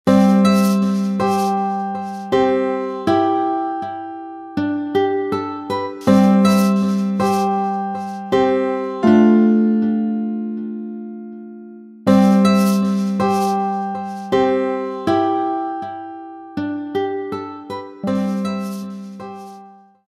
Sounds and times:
Music: 0:00.1 - 0:20.1.

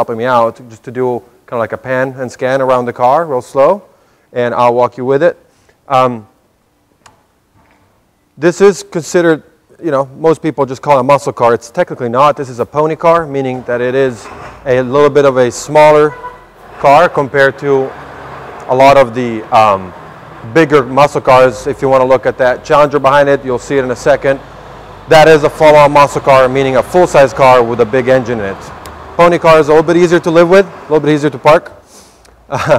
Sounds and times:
Speech: 0:00.0 - 0:06.3, 0:08.4 - 0:16.2, 0:16.8 - 0:17.9, 0:18.7 - 0:24.4, 0:25.1 - 0:31.8.

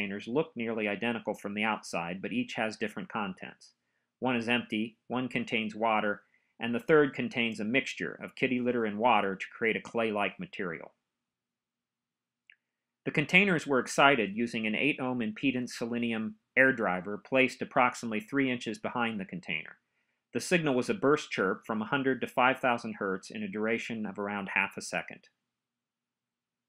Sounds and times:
Speech: 0:00.0 - 0:11.0, 0:13.1 - 0:19.8, 0:20.4 - 0:25.3.

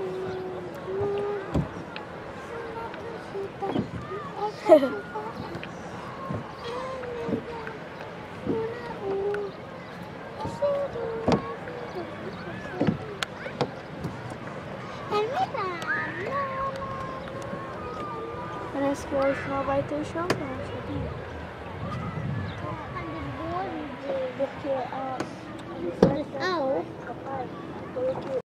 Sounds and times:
Boat, Water vehicle: 0:00.0 - 0:28.4.

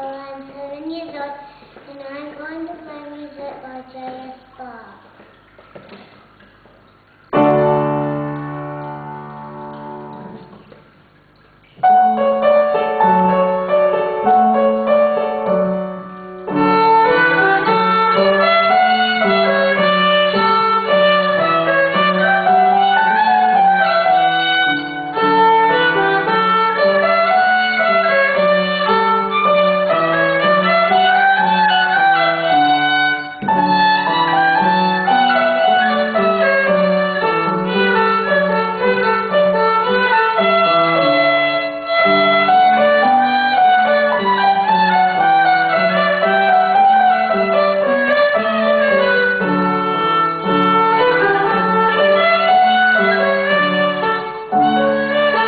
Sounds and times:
Violin, fiddle: 0:16.6 - 0:55.4.

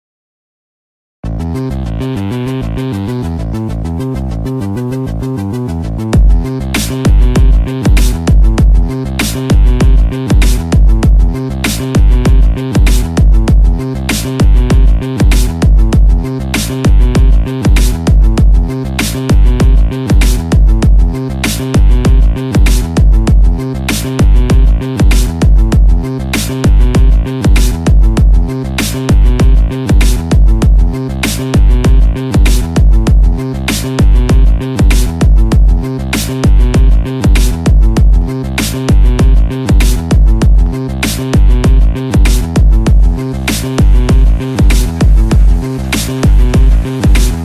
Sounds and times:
Music: 0:01.2 - 0:47.4.

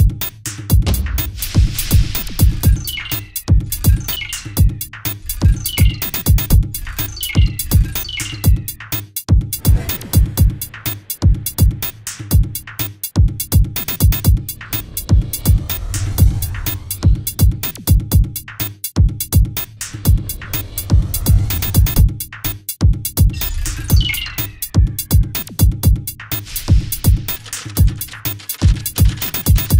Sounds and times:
Music: 0:00.0 - 0:29.7.

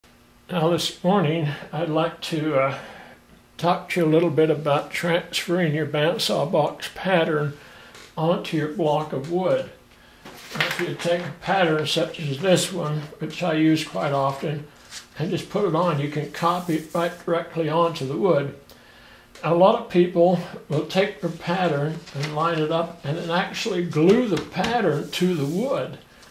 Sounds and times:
Inside, small room: 0:00.0 - 0:26.3
Speech: 0:00.5 - 0:03.0, 0:03.6 - 0:07.6, 0:08.2 - 0:09.8, 0:10.6 - 0:18.6, 0:19.4 - 0:26.0.

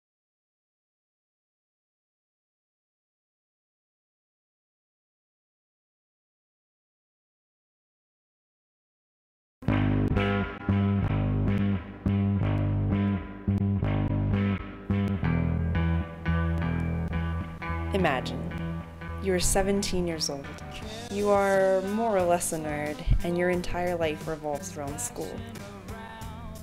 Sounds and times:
Music: 0:09.6 - 0:26.6.

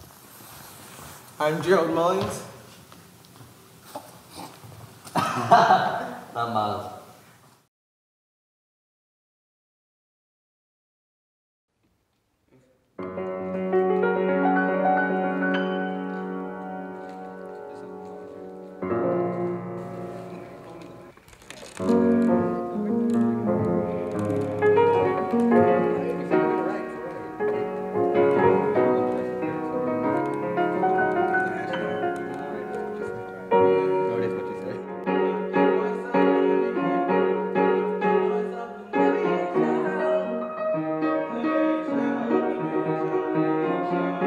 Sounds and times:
Background music: 0:13.0 - 0:21.2, 0:21.8 - 0:44.2.

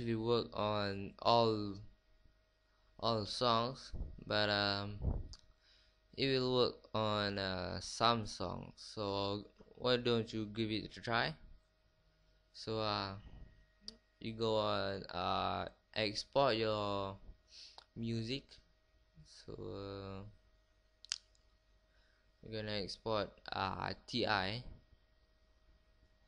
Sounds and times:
Speech: 0:00.0 - 0:01.9, 0:03.0 - 0:05.3, 0:06.2 - 0:11.4, 0:12.6 - 0:13.3, 0:14.2 - 0:17.2, 0:17.8 - 0:18.6, 0:19.2 - 0:20.3, 0:22.4 - 0:24.8.

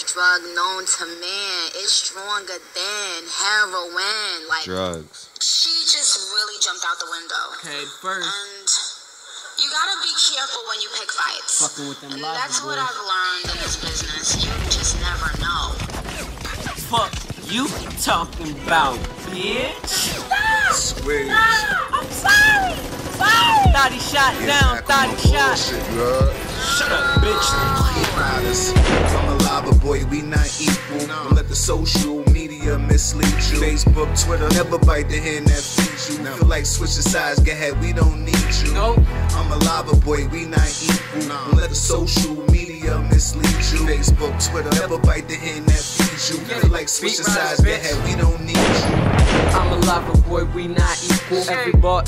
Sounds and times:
Music: 0:11.6 - 0:14.6, 0:17.5 - 0:52.0.

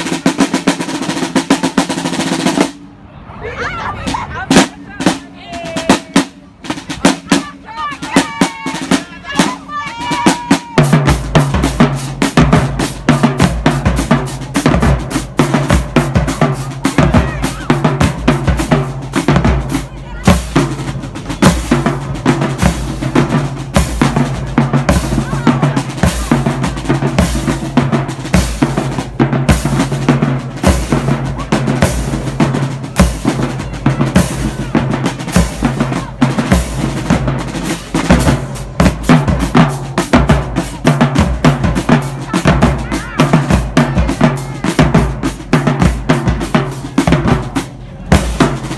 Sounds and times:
Speech: 0:03.2 - 0:10.8, 0:19.7 - 0:20.9, 0:24.3 - 0:26.8, 0:42.0 - 0:45.2, 0:47.6 - 0:48.6.

